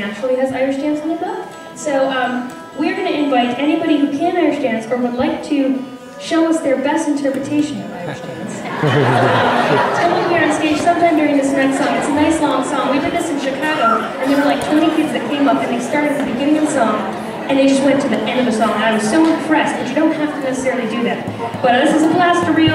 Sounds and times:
Speech: 0.0s - 8.8s, 9.8s - 22.7s.

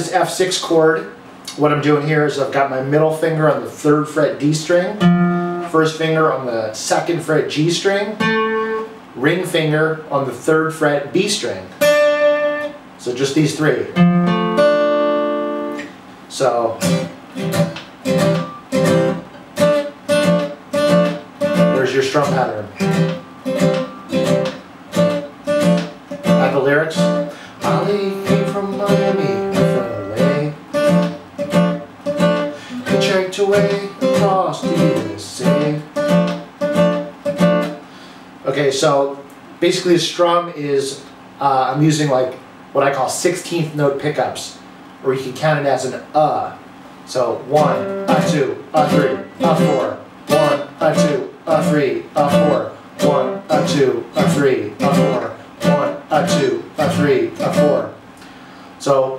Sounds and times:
Speech: 0.0s - 5.0s, 5.7s - 8.2s, 9.2s - 11.8s, 13.0s - 14.0s, 16.3s - 16.8s, 21.7s - 22.8s, 26.3s - 30.6s, 32.8s - 35.9s, 38.4s - 58.0s, 58.8s - 59.1s
Acoustic guitar: 1.4s - 6.0s, 7.8s - 9.1s, 11.7s - 13.0s, 13.9s - 16.0s, 16.6s - 38.2s, 47.4s - 58.7s
Strum: 16.6s - 37.8s, 47.4s - 58.3s.

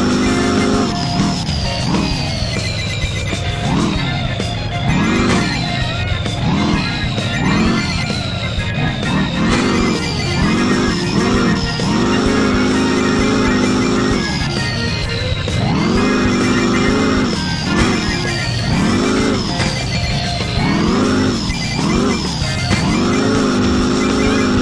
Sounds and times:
Music: 0.0s - 24.6s
Truck: 0.0s - 24.6s.

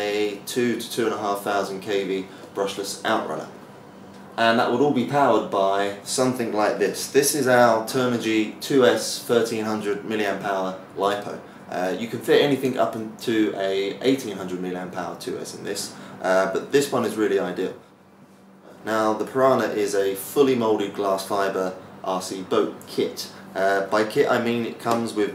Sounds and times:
Speech: 0.0s - 3.6s, 4.4s - 17.8s, 18.7s - 25.3s.

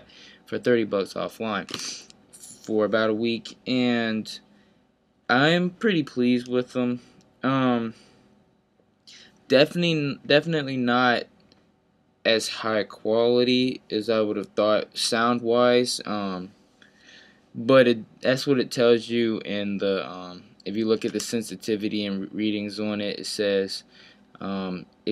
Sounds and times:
Speech: 0.0s - 4.4s, 5.3s - 8.0s, 9.1s - 11.3s, 12.3s - 16.5s, 17.6s - 25.1s.

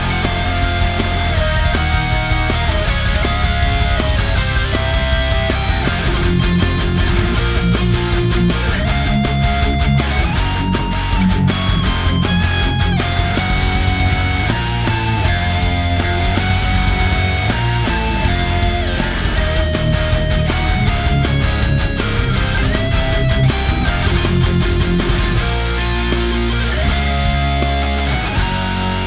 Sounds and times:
Electric guitar: 0.0s - 29.0s
Strum: 0.0s - 29.0s.

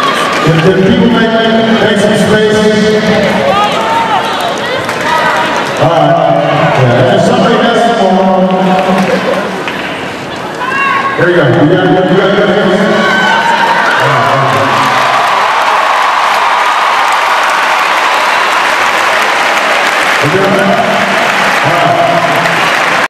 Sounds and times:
Speech: 20.2s - 20.8s.

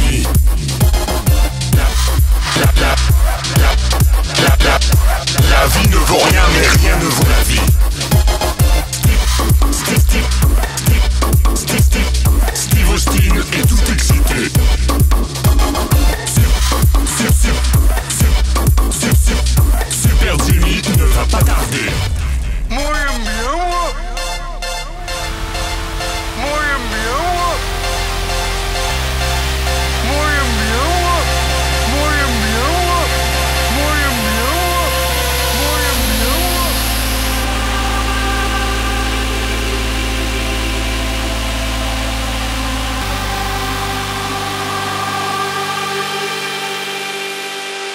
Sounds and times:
Rock music: 0.0s - 38.5s
Electronic dance music: 0.0s - 47.9s.

